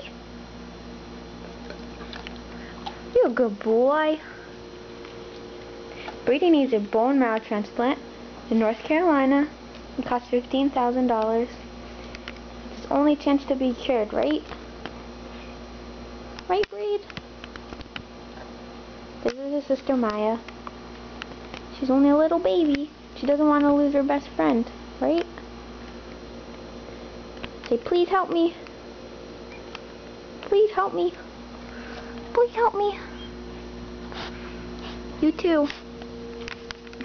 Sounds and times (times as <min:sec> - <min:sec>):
Speech: 0:03.1 - 0:04.3, 0:06.2 - 0:11.6, 0:12.8 - 0:14.6, 0:16.5 - 0:17.1, 0:19.2 - 0:20.4, 0:21.7 - 0:25.3, 0:27.7 - 0:28.6, 0:30.4 - 0:31.3, 0:32.3 - 0:33.1, 0:35.2 - 0:35.8.